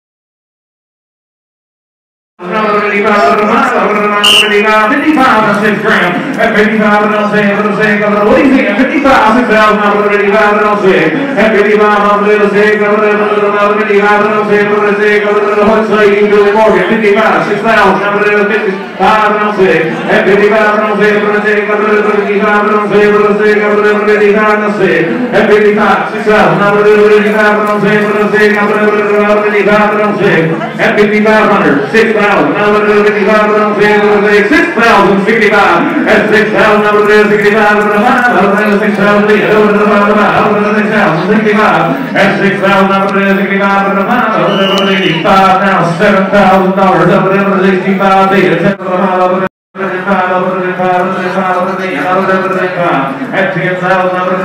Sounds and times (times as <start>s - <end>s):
Speech: 2.4s - 54.4s.